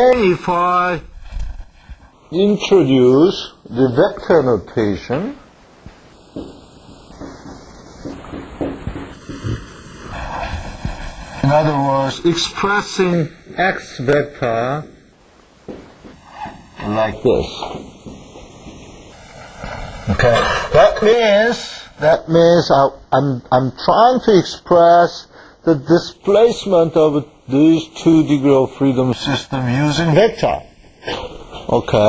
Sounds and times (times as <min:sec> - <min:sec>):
Speech: 0:00.0 - 0:01.1, 0:02.3 - 0:05.4, 0:11.4 - 0:14.9, 0:16.8 - 0:17.8, 0:20.1 - 0:30.7, 0:31.7 - 0:32.0.